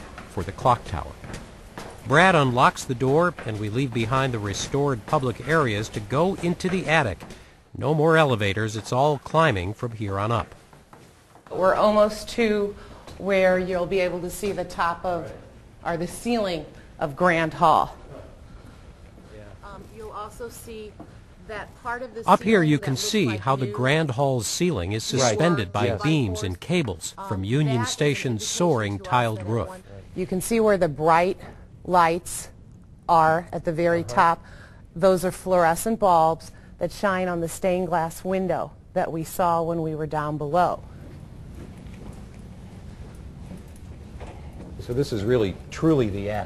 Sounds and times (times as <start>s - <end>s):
Female speech, woman speaking: 11.5s - 18.0s, 19.6s - 24.4s, 25.0s - 32.5s, 33.1s - 34.4s, 35.0s - 40.8s.